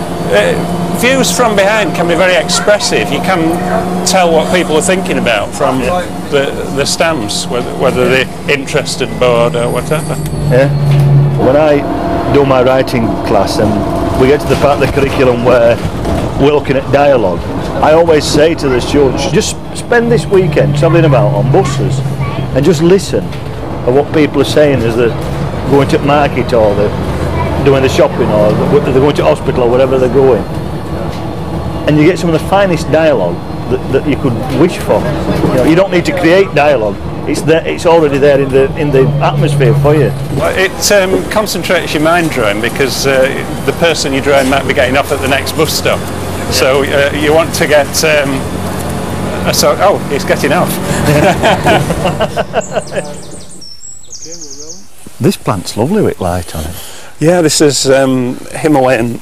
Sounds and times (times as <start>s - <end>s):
Speech: 0.3s - 10.8s, 11.4s - 15.8s, 16.4s - 23.3s, 23.9s - 30.5s, 31.9s - 48.4s, 49.4s - 50.8s, 54.2s - 59.2s.